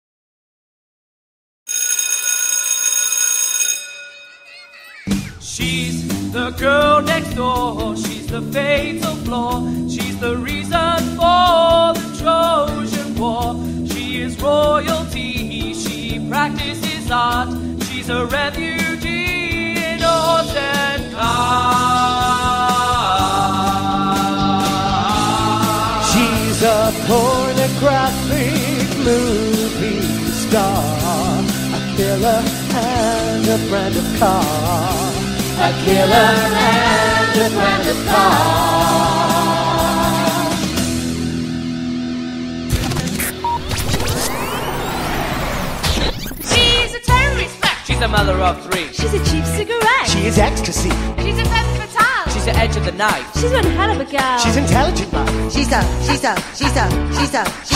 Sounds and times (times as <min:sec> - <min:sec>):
Music: 0:05.0 - 0:57.7.